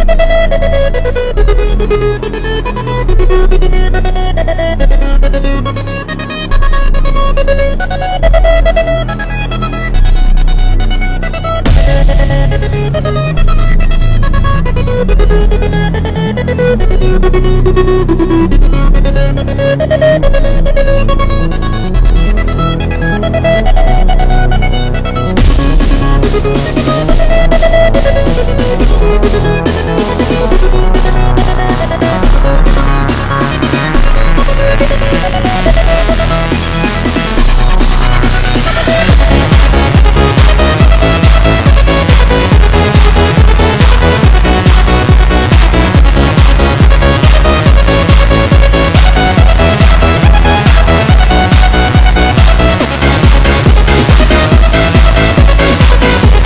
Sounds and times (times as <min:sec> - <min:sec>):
Music: 0:00.0 - 0:56.4.